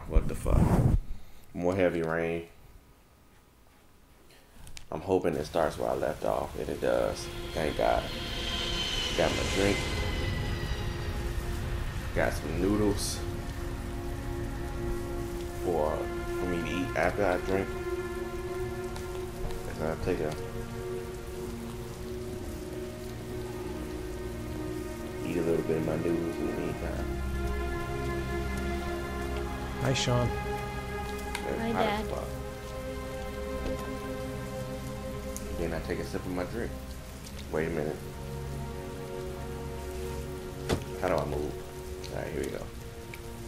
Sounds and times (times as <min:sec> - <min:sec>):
Speech: 0:00.0 - 0:00.7, 0:01.6 - 0:02.5, 0:04.9 - 0:08.0, 0:12.2 - 0:13.2, 0:15.6 - 0:17.7, 0:19.7 - 0:20.4, 0:25.2 - 0:27.0, 0:29.8 - 0:30.3, 0:31.4 - 0:32.3, 0:35.6 - 0:36.7, 0:37.5 - 0:38.0, 0:41.0 - 0:42.7
Rain on surface: 0:01.2 - 0:43.4
Raindrop: 0:04.3 - 0:43.4
Music: 0:05.0 - 0:43.4.